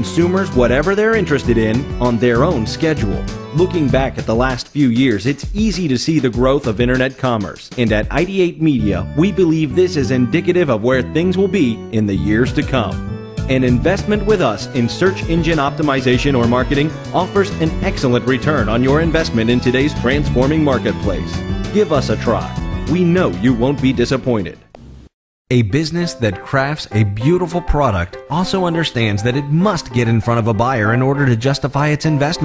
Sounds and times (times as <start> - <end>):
Speech: 0.0 - 24.6, 25.5 - 32.4
Music: 0.0 - 32.4.